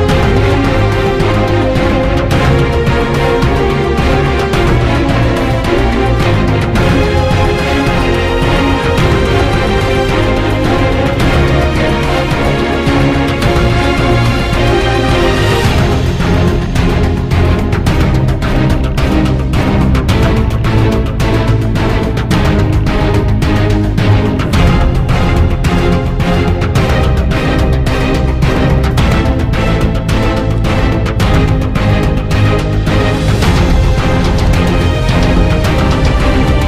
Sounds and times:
Background music: 0.0s - 36.6s.

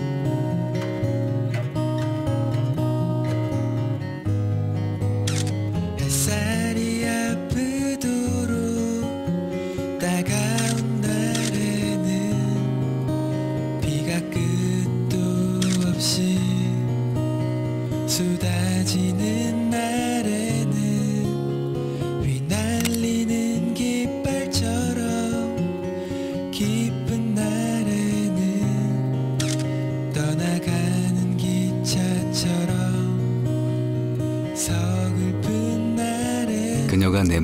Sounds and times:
Music: 0.0s - 37.4s.

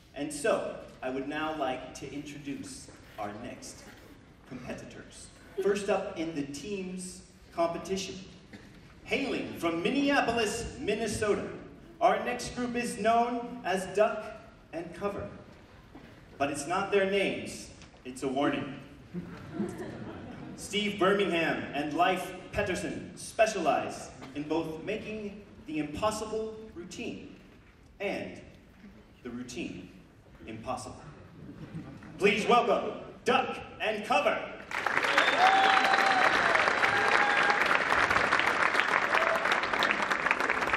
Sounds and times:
Speech: 0.2s - 8.3s, 9.0s - 15.4s, 16.4s - 18.8s, 20.6s - 27.4s, 28.0s - 28.5s, 29.2s - 31.2s, 32.2s - 34.5s.

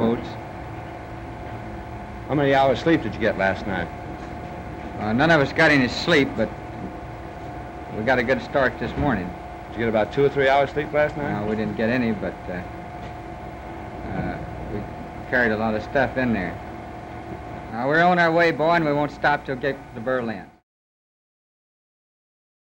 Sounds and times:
Speech: 0.0s - 0.4s, 2.3s - 3.9s, 5.0s - 6.6s, 8.0s - 12.7s, 14.1s - 16.6s, 17.7s - 20.6s.

